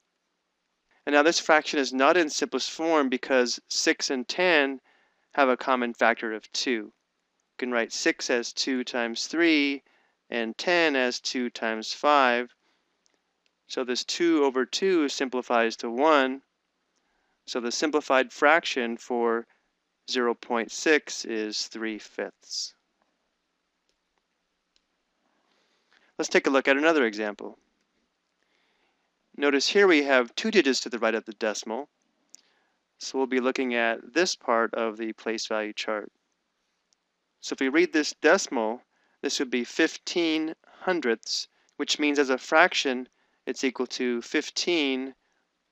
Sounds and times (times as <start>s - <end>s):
Speech: 1.1s - 4.8s, 5.4s - 6.9s, 7.6s - 12.5s, 13.7s - 16.4s, 17.5s - 19.4s, 20.1s - 22.7s, 26.2s - 27.6s, 29.4s - 31.9s, 33.0s - 36.1s, 37.4s - 45.2s.